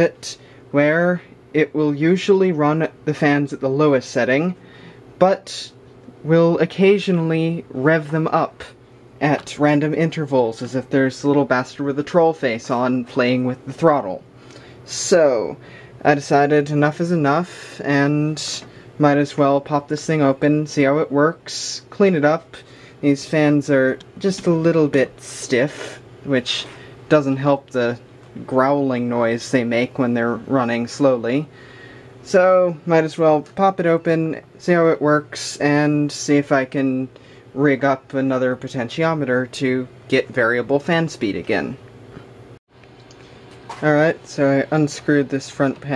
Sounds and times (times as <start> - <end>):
Speech: 0.0 - 4.6, 5.2 - 14.3, 14.9 - 31.6, 32.2 - 41.8, 43.7 - 45.9.